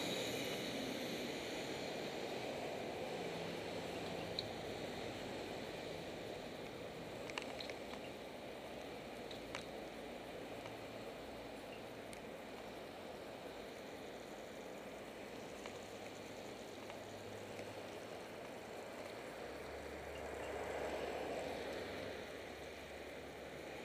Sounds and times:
Vehicle: 0:00.0 - 0:23.8.

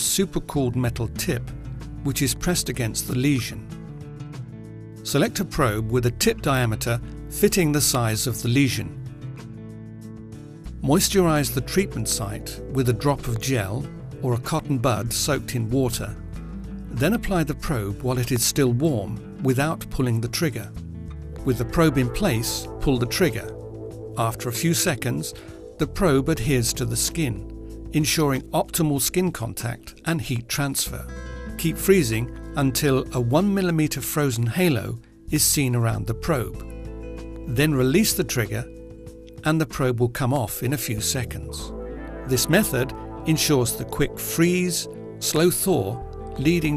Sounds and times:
Speech: 0:00.0 - 0:03.7, 0:05.0 - 0:09.0, 0:10.8 - 0:16.2, 0:16.9 - 0:20.8, 0:21.4 - 0:23.6, 0:24.2 - 0:36.6, 0:37.5 - 0:38.7, 0:39.4 - 0:41.7, 0:42.3 - 0:46.7
Music: 0:00.0 - 0:46.7.

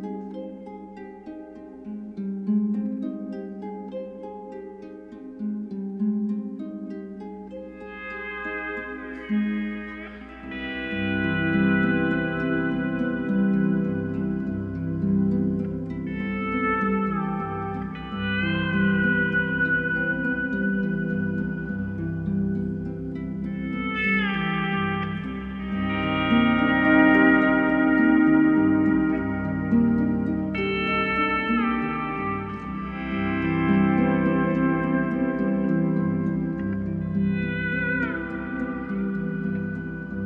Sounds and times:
Music: 0:00.0 - 0:40.2.

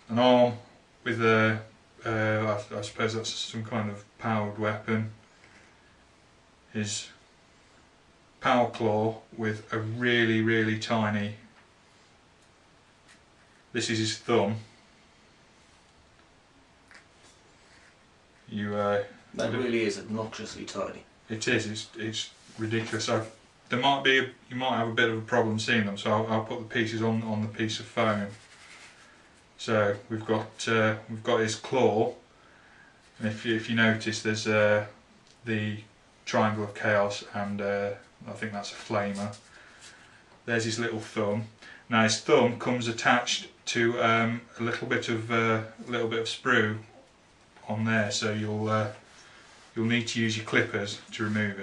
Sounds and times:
Speech: 0:00.0 - 0:05.2, 0:06.7 - 0:07.2, 0:08.4 - 0:11.5, 0:13.7 - 0:14.8, 0:18.5 - 0:28.5, 0:29.6 - 0:32.2, 0:33.2 - 0:39.5, 0:40.5 - 0:49.1, 0:49.7 - 0:51.6.

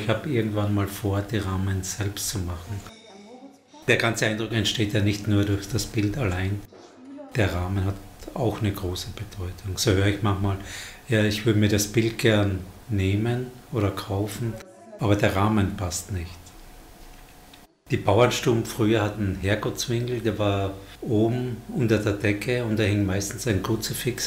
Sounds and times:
Speech: 0:00.0 - 0:16.4, 0:17.9 - 0:24.2.

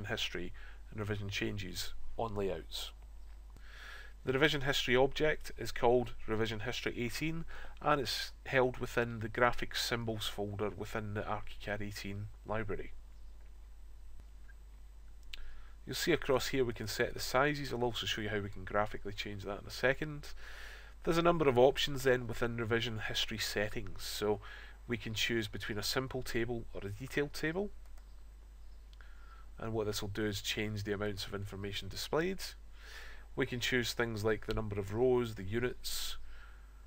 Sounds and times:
Speech: 0:00.0 - 0:03.0, 0:04.2 - 0:13.0, 0:15.9 - 0:20.4, 0:21.0 - 0:27.8, 0:29.6 - 0:32.6, 0:33.4 - 0:36.2.

